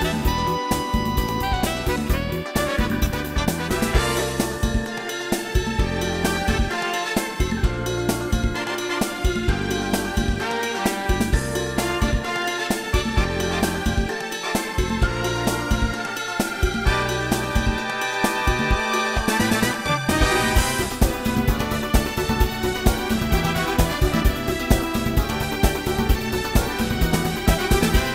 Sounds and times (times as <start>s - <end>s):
Exciting music: 0.0s - 28.1s.